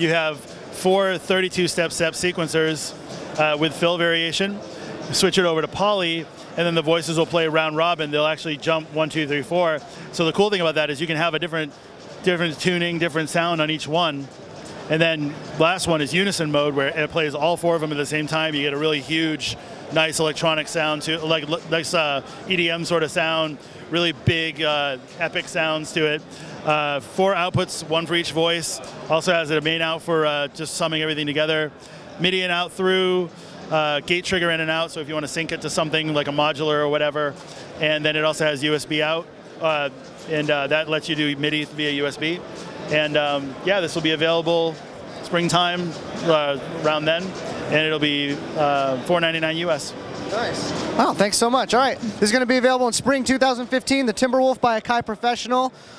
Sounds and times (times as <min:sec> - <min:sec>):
Speech: 0:00.0 - 0:14.3, 0:14.9 - 0:55.8.